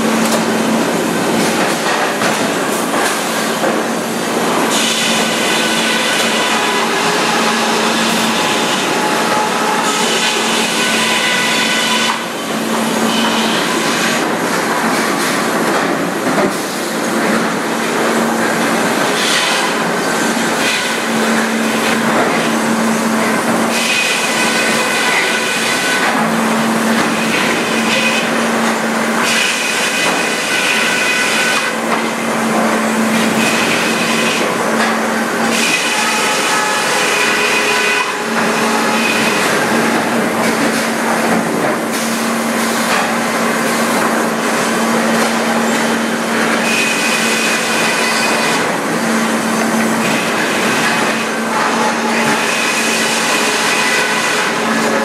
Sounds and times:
Sawing: 0.0 - 55.0.

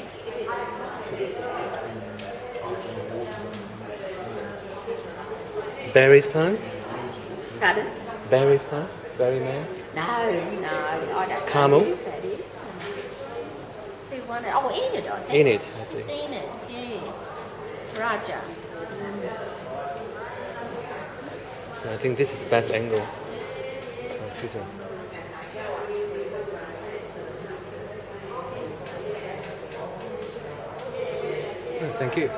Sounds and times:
Female speech, woman speaking: 0.0 - 1.8, 7.4 - 8.1, 9.9 - 19.6.

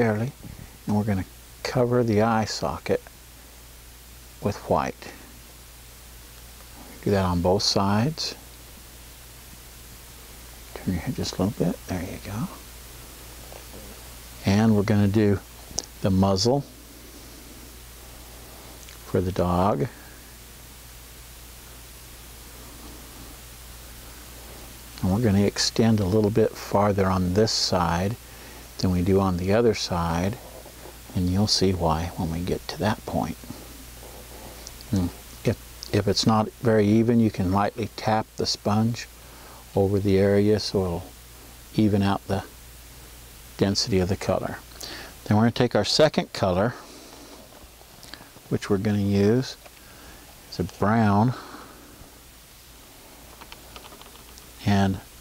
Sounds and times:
Speech: 0.0 - 3.1, 4.4 - 5.3, 7.0 - 8.4, 10.7 - 12.6, 14.4 - 16.7, 19.0 - 20.0, 25.0 - 28.2, 28.8 - 30.4, 31.1 - 33.5, 34.9 - 39.1, 39.7 - 42.5, 43.6 - 46.8, 48.5 - 49.6, 50.5 - 51.4, 54.6 - 55.1.

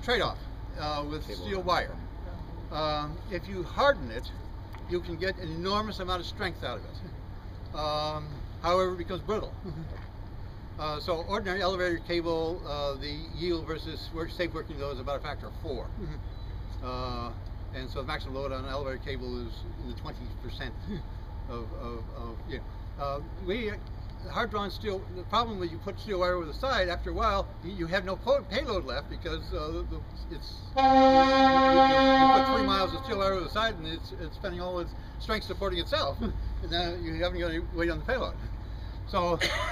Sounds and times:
Speech: 0.0 - 7.2, 7.8 - 9.6, 10.8 - 16.0, 16.8 - 20.8, 21.5 - 30.8, 31.8 - 38.4, 39.1 - 39.4.

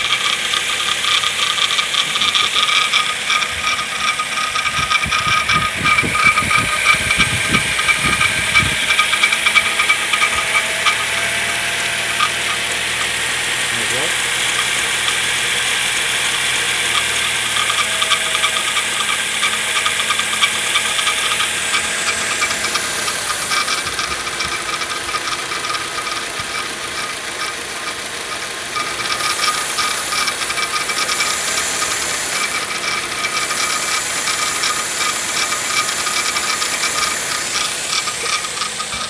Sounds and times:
Gears: 0.0 - 39.0
Ratchet, pawl: 0.0 - 39.0.

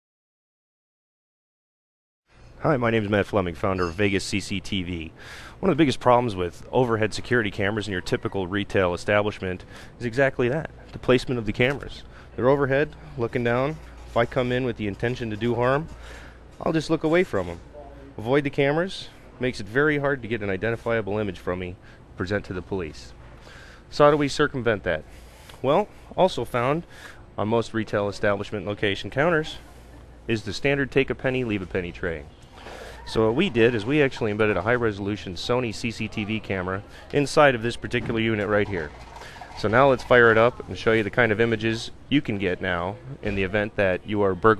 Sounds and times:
Speech: 2.6 - 15.9, 16.6 - 23.1, 23.9 - 32.3, 33.0 - 38.9, 39.6 - 44.5.

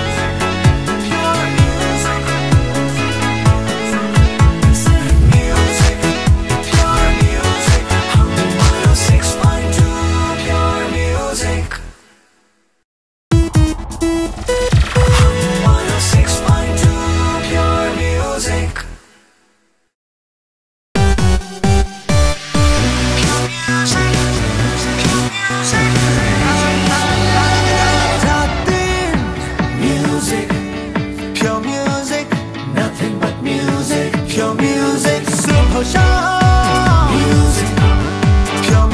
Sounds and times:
Music: 0.0 - 12.4, 13.3 - 19.4, 21.0 - 38.9.

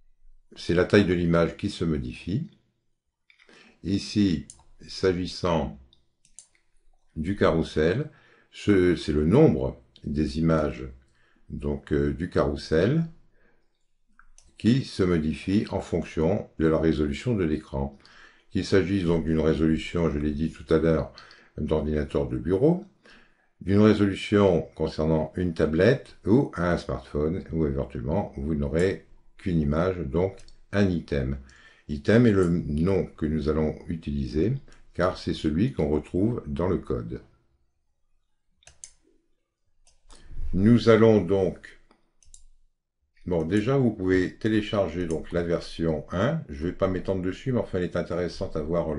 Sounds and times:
Speech: 0.6 - 2.6, 3.8 - 5.9, 7.2 - 13.2, 14.6 - 22.9, 23.6 - 37.4, 40.3 - 41.9, 43.2 - 48.9.

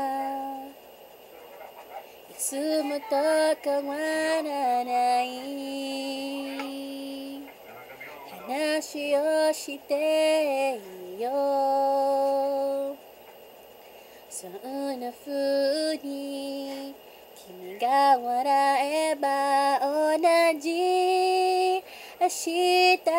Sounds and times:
Female singing: 0.0 - 0.8, 2.3 - 7.5, 8.4 - 13.0, 14.3 - 23.1.

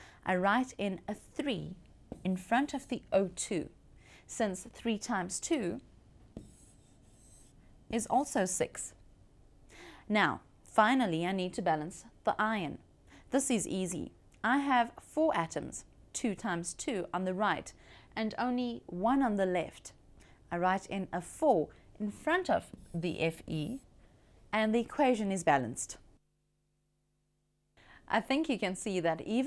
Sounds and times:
Speech: 0.3 - 5.9, 7.9 - 9.0, 10.1 - 23.9, 24.6 - 26.0, 28.1 - 29.4
Writing: 0.8 - 1.5, 6.3 - 7.7, 22.5 - 23.9.

